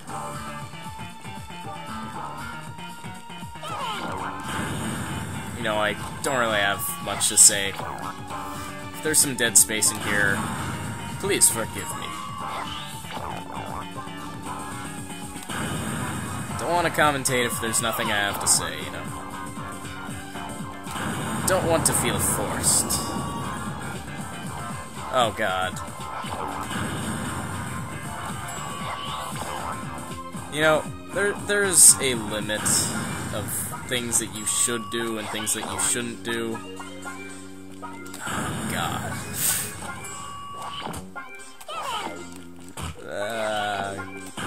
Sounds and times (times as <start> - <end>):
Music: 0.0 - 44.4
Speech: 16.6 - 19.1, 21.5 - 23.1, 25.2 - 25.8, 30.6 - 36.6, 43.0 - 44.0.